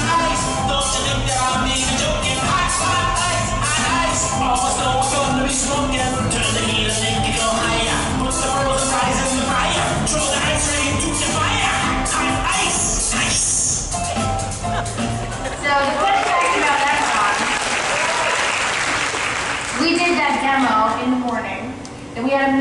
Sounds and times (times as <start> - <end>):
Singing: 0.0 - 13.8
Applause: 15.8 - 19.9.